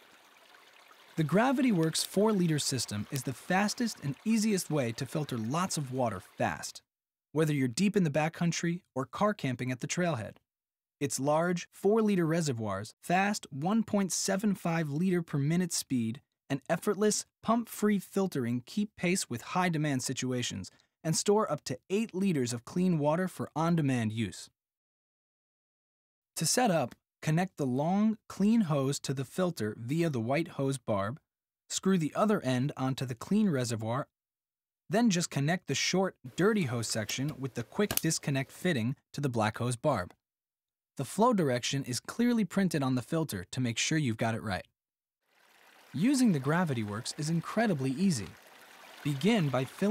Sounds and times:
Speech: 1.2s - 10.4s, 11.0s - 24.6s, 26.4s - 34.1s, 34.9s - 40.2s, 41.0s - 44.7s, 46.0s - 48.4s, 49.1s - 49.9s.

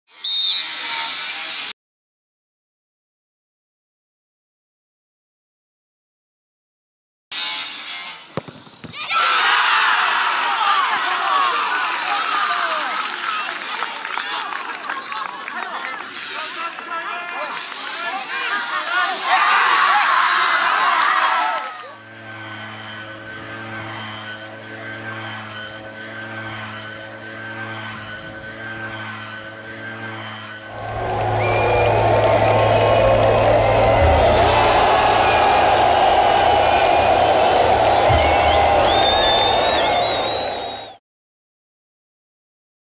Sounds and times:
Outside, urban or manmade: 0.1s - 1.8s, 7.3s - 41.0s.

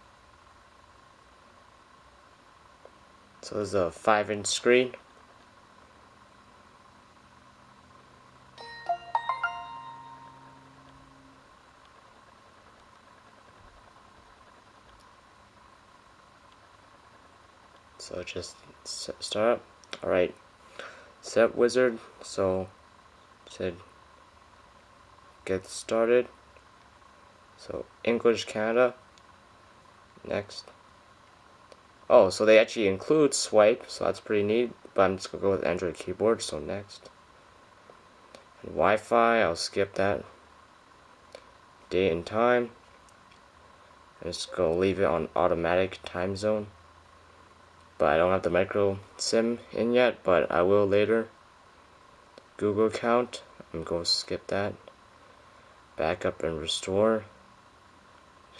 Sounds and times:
Speech: 3.4s - 5.0s, 18.0s - 20.4s, 21.2s - 22.8s, 23.5s - 23.9s, 25.4s - 26.4s, 27.6s - 29.0s, 30.2s - 30.8s, 32.1s - 37.1s, 38.6s - 40.4s, 41.9s - 42.8s, 44.2s - 46.8s, 48.0s - 51.3s, 52.6s - 54.9s, 56.0s - 57.4s.

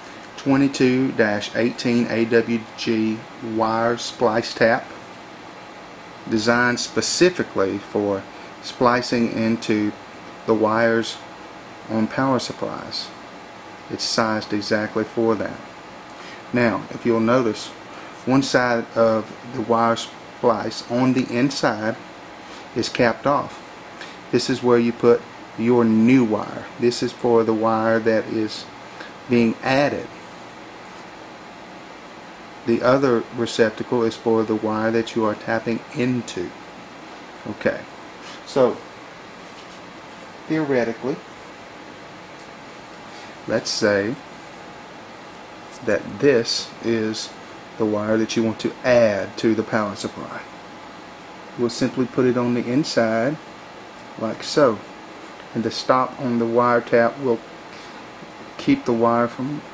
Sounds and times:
Speech: 0.4s - 5.0s, 6.2s - 11.3s, 11.9s - 13.2s, 13.9s - 15.7s, 16.5s - 22.0s, 22.7s - 23.6s, 24.3s - 28.7s, 29.3s - 30.1s, 32.6s - 36.6s, 37.4s - 38.9s, 40.5s - 41.3s, 43.5s - 44.2s, 45.8s - 50.5s, 51.6s - 53.4s, 54.2s - 54.9s, 55.5s - 57.4s, 58.6s - 59.7s.

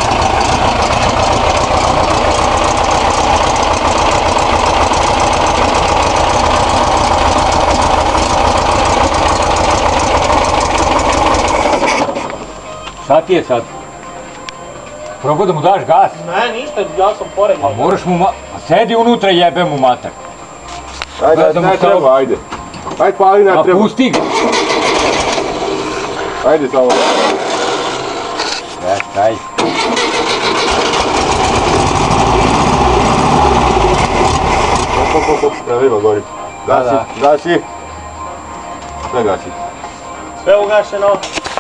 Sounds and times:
Heavy engine (low frequency): 0.0s - 12.8s, 24.2s - 35.8s
Vehicle: 0.0s - 13.0s, 24.1s - 36.3s
Engine starting: 10.2s - 12.4s, 24.0s - 28.6s, 29.6s - 35.5s
Music: 12.3s - 24.1s, 28.4s - 30.6s, 35.2s - 41.6s.

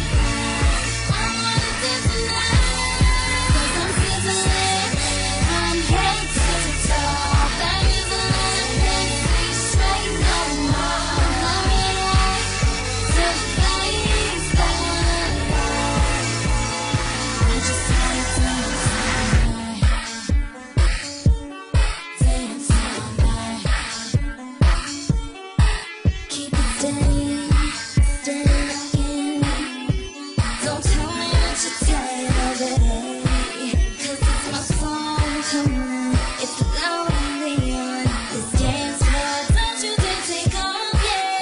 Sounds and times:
Exciting music: 0.0s - 25.9s
Pop music: 0.0s - 41.4s.

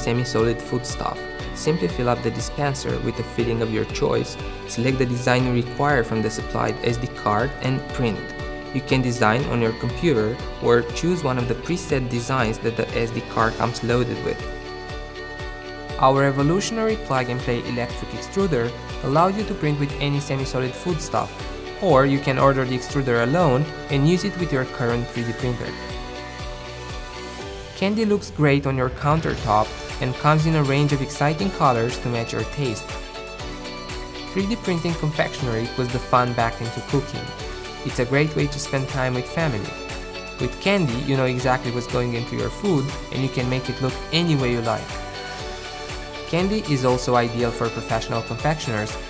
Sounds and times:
Speech: 0.0s - 14.4s, 16.0s - 25.8s, 27.8s - 32.9s, 34.3s - 39.8s, 40.4s - 44.9s, 46.3s - 49.0s
Music: 0.0s - 49.0s.

